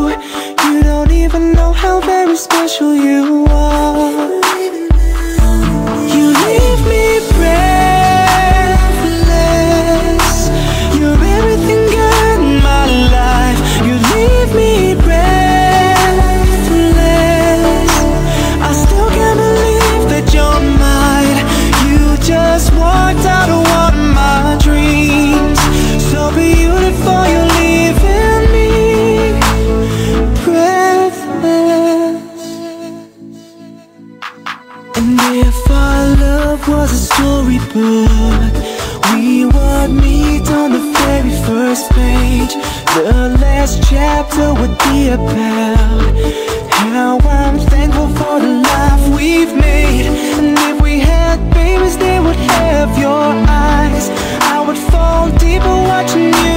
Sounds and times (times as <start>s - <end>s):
Rhythm and blues: 0.0s - 56.5s.